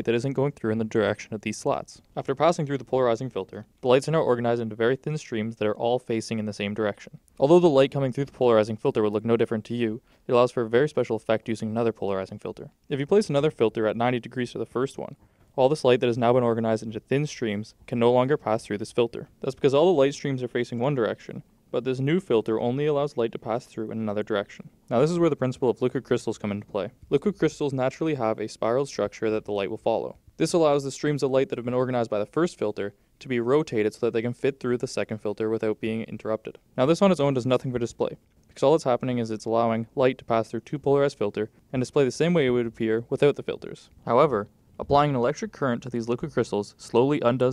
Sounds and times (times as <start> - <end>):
Speech: 0.0 - 47.5.